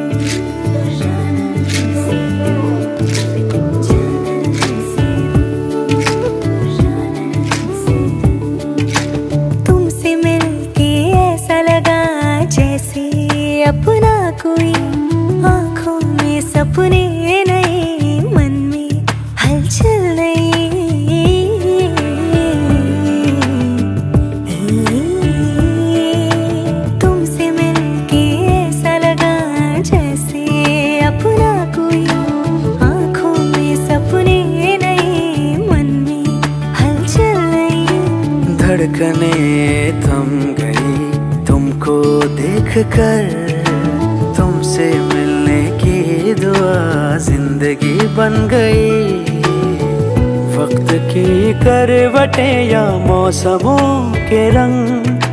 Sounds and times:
Music: 0:00.0 - 0:55.3.

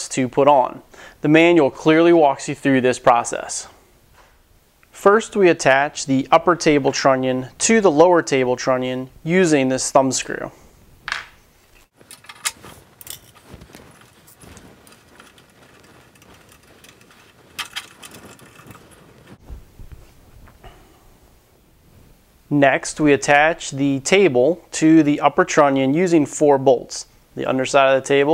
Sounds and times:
Speech: 0:00.0 - 0:03.8, 0:04.9 - 0:10.6, 0:22.5 - 0:28.3
Tools: 0:11.8 - 0:13.4, 0:14.9 - 0:18.8.

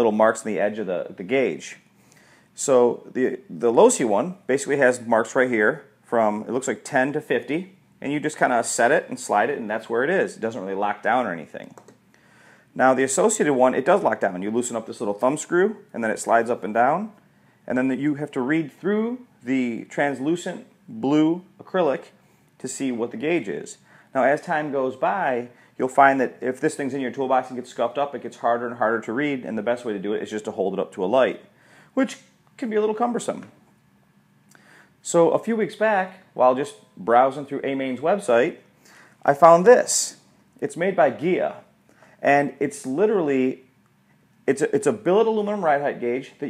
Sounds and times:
Speech: 0:00.0 - 0:01.8, 0:02.6 - 0:11.8, 0:12.8 - 0:33.6, 0:35.0 - 0:43.7, 0:44.4 - 0:46.4.

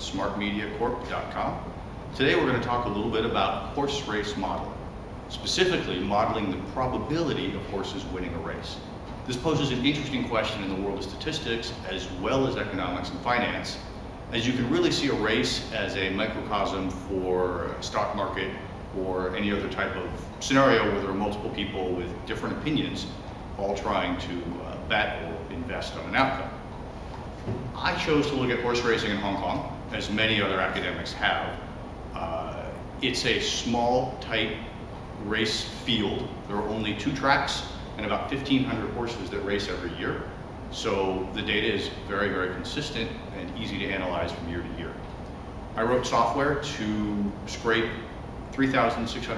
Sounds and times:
Speech: 0:00.0 - 0:26.6, 0:27.8 - 0:45.0, 0:45.8 - 0:49.3.

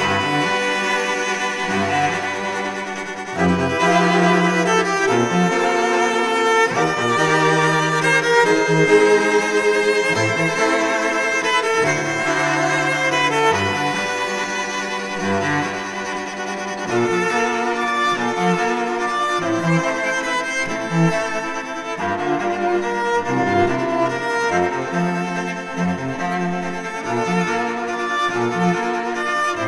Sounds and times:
Cello: 0:00.0 - 0:29.6.

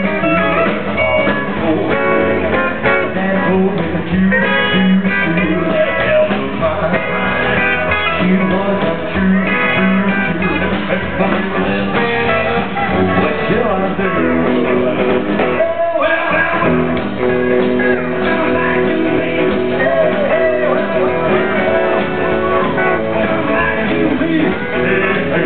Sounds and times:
Independent music: 0:00.0 - 0:25.4.

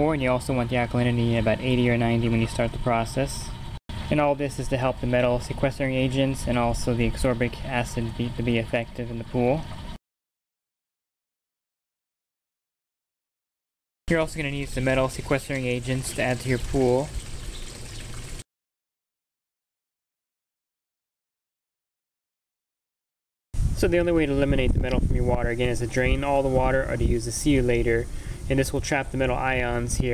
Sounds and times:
Speech: 0:00.0 - 0:03.5, 0:04.1 - 0:09.6, 0:14.1 - 0:17.1, 0:23.8 - 0:30.1.

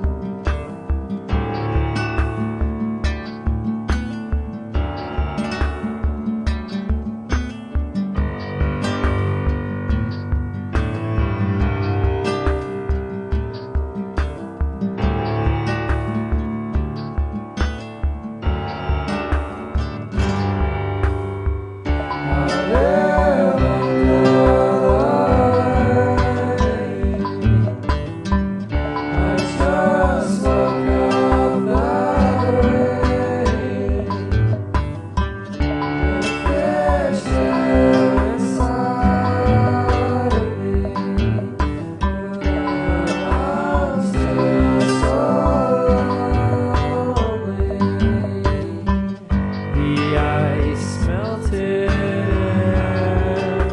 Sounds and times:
Music: 0:00.0 - 0:53.7.

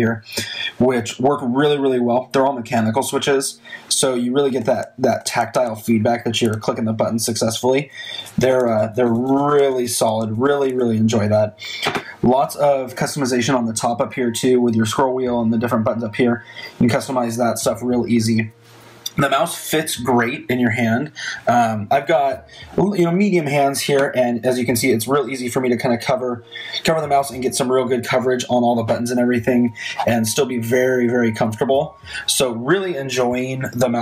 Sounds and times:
Speech: 0:00.0 - 0:34.0.

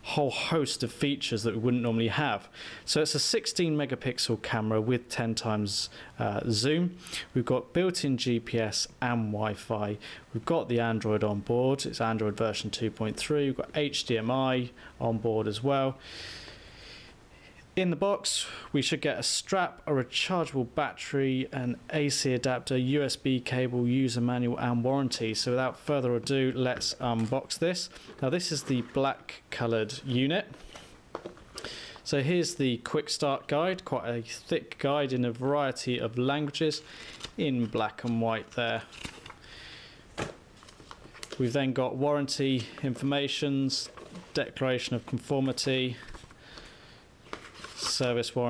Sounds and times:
Speech: 0:00.0 - 0:16.0, 0:17.8 - 0:30.6, 0:32.1 - 0:36.8, 0:37.4 - 0:38.9, 0:41.4 - 0:46.1, 0:47.8 - 0:48.5.

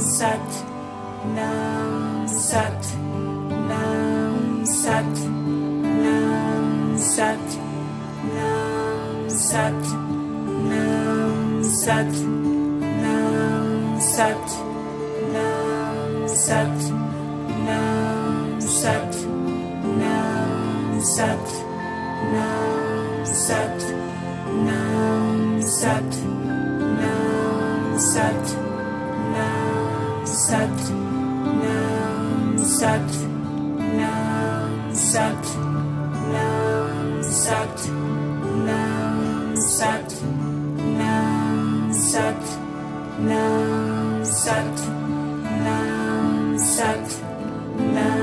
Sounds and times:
Mantra: 0:00.0 - 0:48.2.

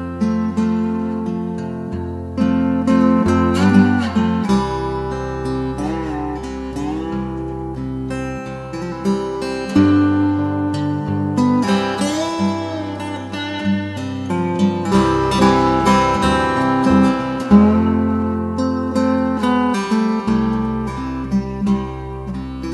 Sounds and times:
Guitar: 0:00.0 - 0:22.7.

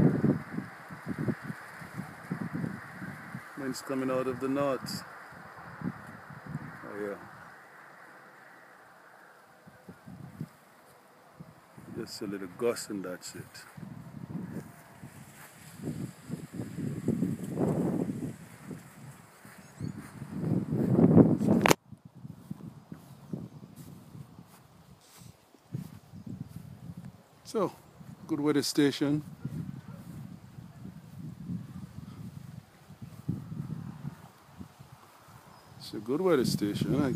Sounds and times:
Wind: 0:00.0 - 0:37.1.

